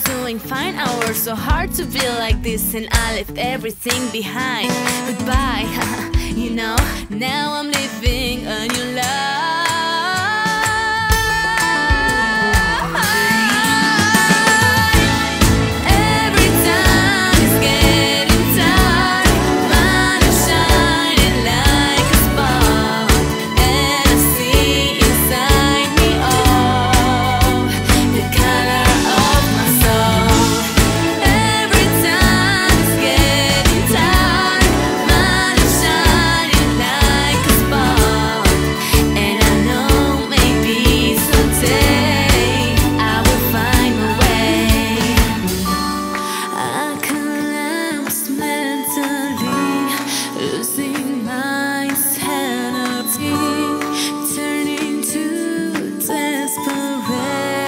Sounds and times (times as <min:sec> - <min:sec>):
Music: 0:00.0 - 0:57.6.